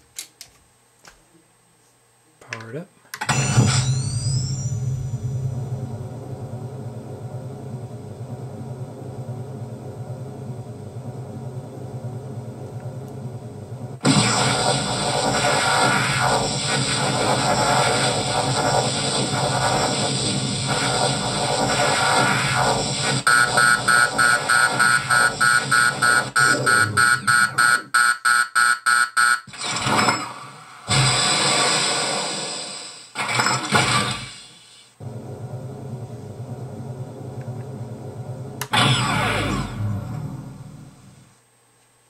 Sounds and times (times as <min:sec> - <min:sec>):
Sound effect: 0:03.2 - 0:07.4, 0:14.0 - 0:27.9, 0:29.5 - 0:41.2.